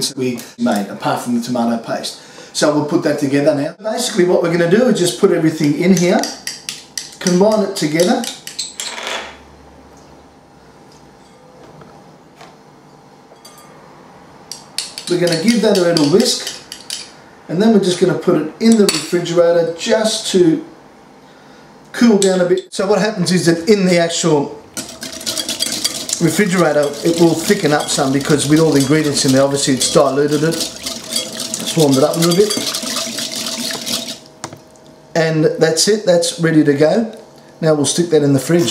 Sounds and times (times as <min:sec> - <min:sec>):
Stir: 0:05.9 - 0:08.8, 0:14.5 - 0:17.1, 0:24.8 - 0:34.3.